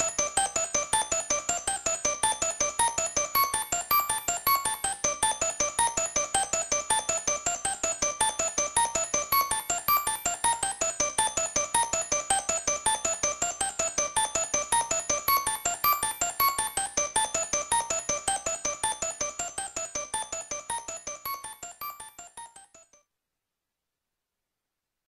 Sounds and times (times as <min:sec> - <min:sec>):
Music: 0:00.0 - 0:23.0.